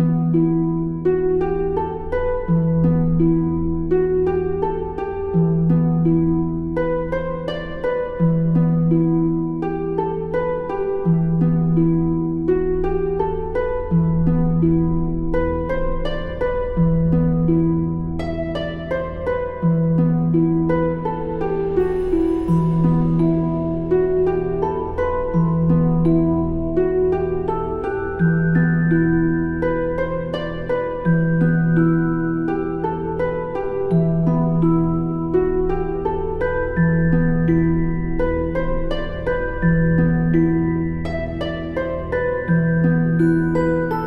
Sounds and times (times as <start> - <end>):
Music: 0.0 - 44.0.